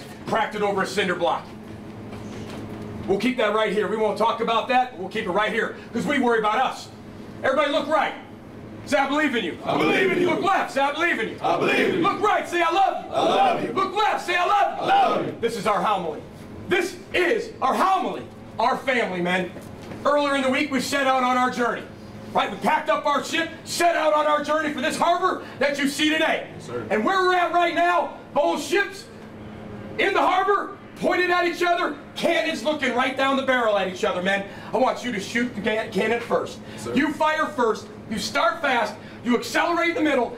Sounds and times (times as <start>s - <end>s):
Male speech, man speaking: 0.0s - 1.5s, 3.1s - 8.3s, 8.9s - 29.1s, 30.0s - 40.3s.